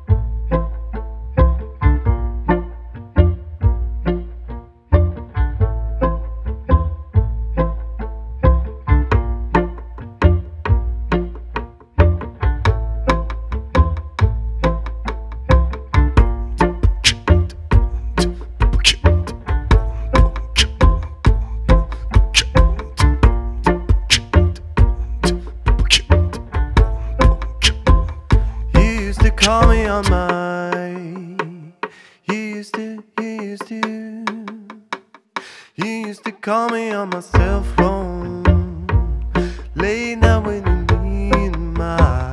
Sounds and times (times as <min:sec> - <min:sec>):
Musical instrument: 0:00.0 - 0:32.6, 0:37.3 - 0:42.3.